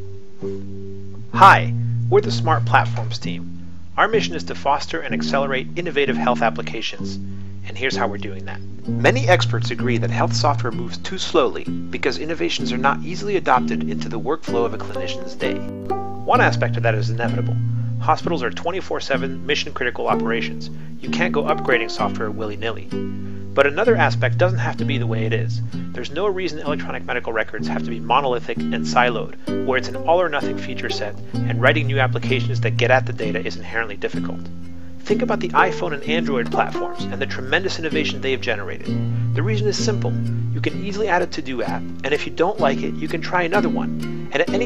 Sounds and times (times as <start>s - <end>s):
Narration, monologue: 0.5s - 44.6s.